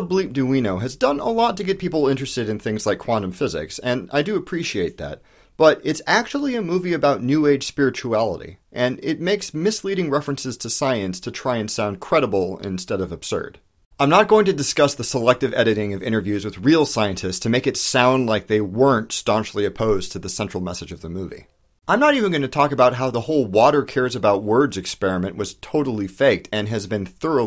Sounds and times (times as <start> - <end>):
Speech: 0.0 - 27.4.